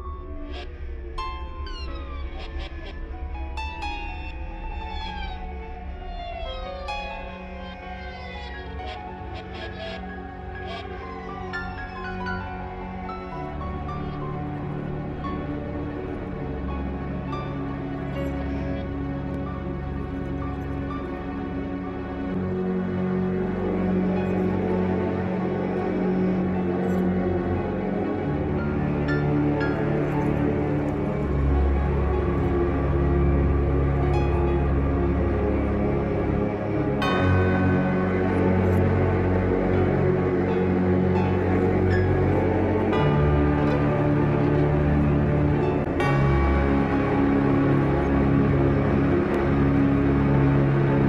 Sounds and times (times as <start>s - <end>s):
Orchestra: 2.8s - 51.0s.